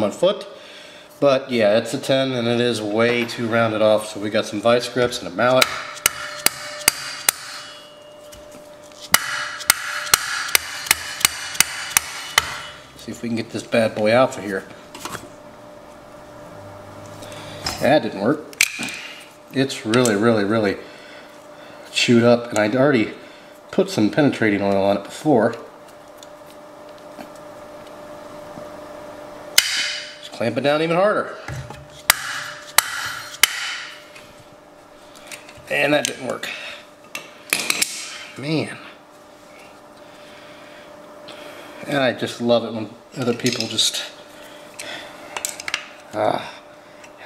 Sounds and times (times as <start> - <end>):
Speech: 0.0 - 0.5, 1.2 - 5.7, 13.0 - 14.7, 17.8 - 18.5, 19.5 - 20.8, 21.9 - 25.7, 30.2 - 31.4, 35.7 - 36.6, 38.4 - 39.0, 41.8 - 44.2, 46.1 - 46.6.